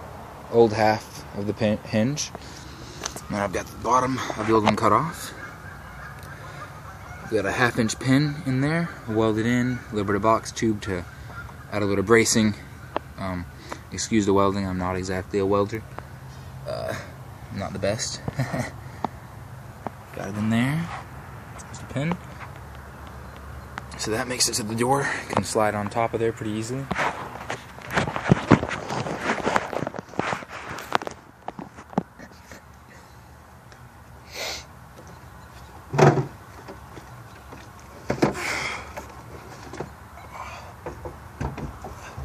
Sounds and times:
Speech: 0.5 - 2.4, 3.3 - 5.4, 7.3 - 11.1, 11.7 - 12.6, 13.2 - 15.8, 16.7 - 18.3, 20.1 - 21.0, 21.6 - 22.2, 23.9 - 27.0.

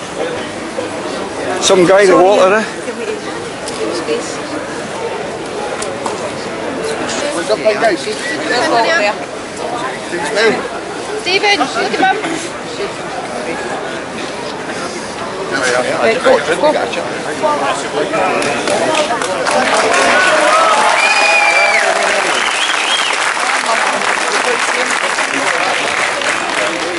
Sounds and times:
Crowd: 0.0 - 26.9
Outside, urban or manmade: 0.0 - 26.9.

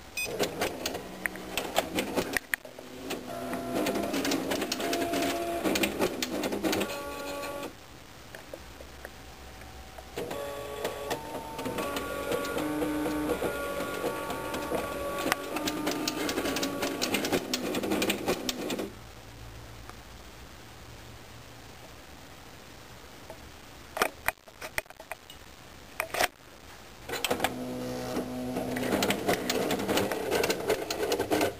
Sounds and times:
Printer: 0.2 - 7.7, 10.1 - 18.9, 27.1 - 31.6.

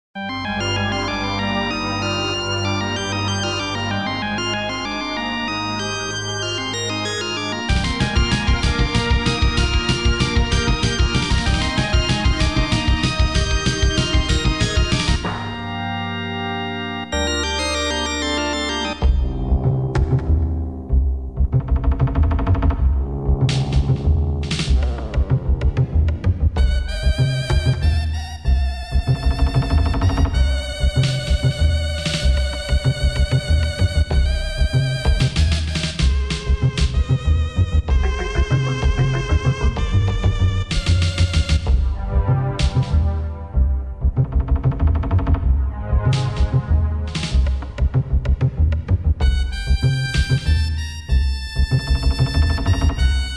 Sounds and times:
Video game music: 0.2 - 53.3.

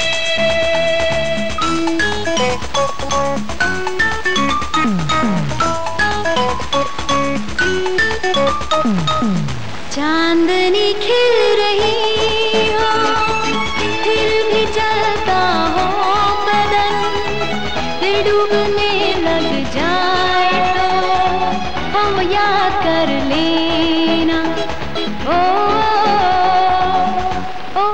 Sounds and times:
Music: 0.0 - 27.9.

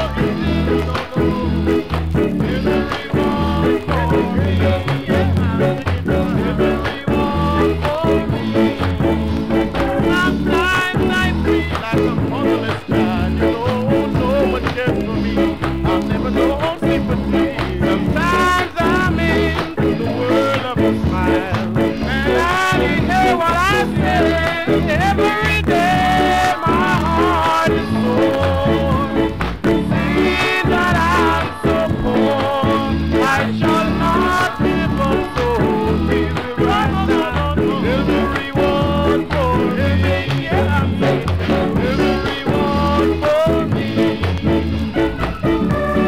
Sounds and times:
Ska: 0.0 - 46.0.

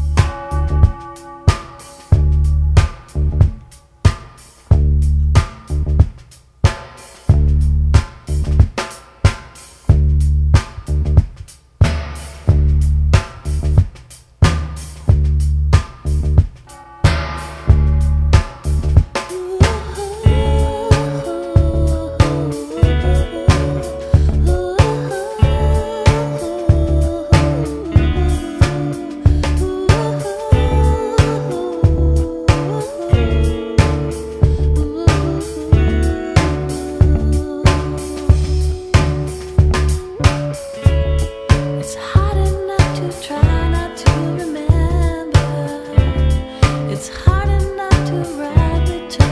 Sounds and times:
Music: 0.0 - 49.3.

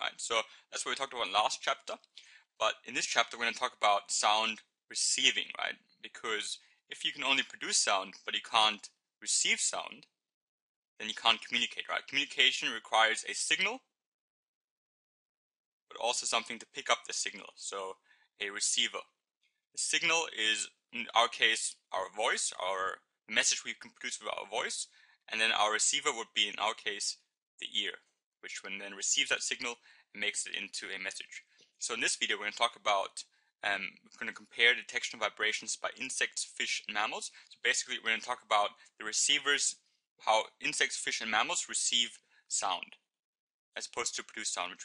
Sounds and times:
Speech: 0.0 - 10.1, 11.0 - 13.9, 15.9 - 19.1, 19.8 - 43.1, 43.8 - 44.8.

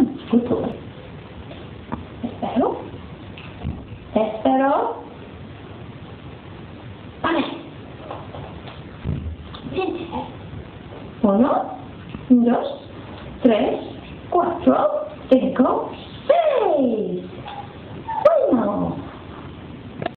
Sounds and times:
Speech: 0.0 - 0.9, 2.2 - 2.9, 4.1 - 5.1, 7.2 - 7.7, 11.2 - 17.4, 18.2 - 19.1.

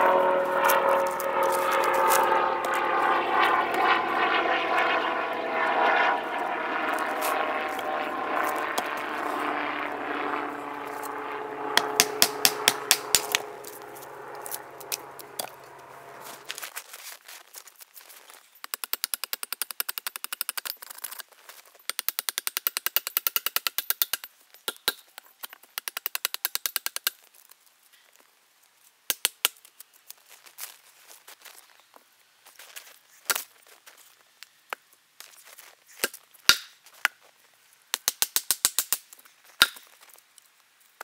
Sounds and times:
Tools: 18.6 - 27.2.

